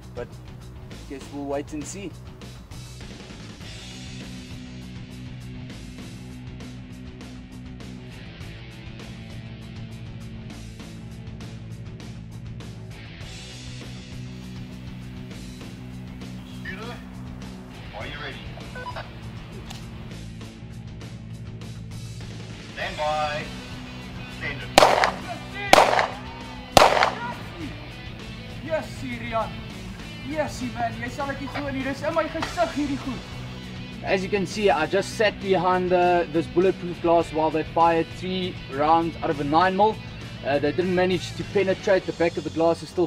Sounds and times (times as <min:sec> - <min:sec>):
Music: 0:00.0 - 0:43.0.